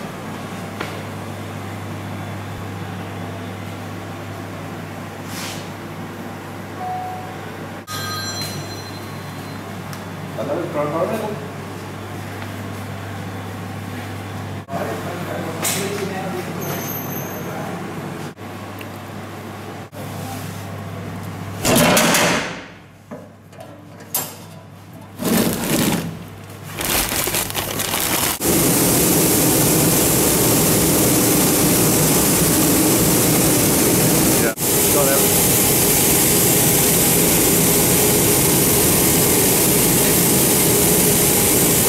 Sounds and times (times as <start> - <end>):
Speech: 10.4 - 11.6, 14.7 - 17.9, 34.4 - 35.3.